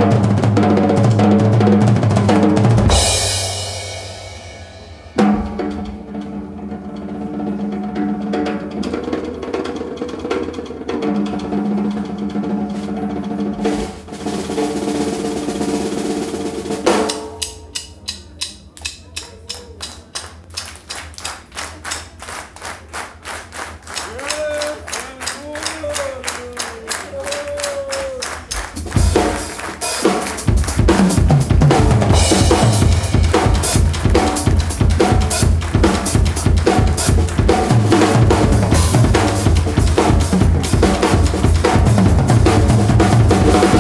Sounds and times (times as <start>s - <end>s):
Drum kit: 0.0s - 43.8s
Snare drum: 27.3s - 43.8s.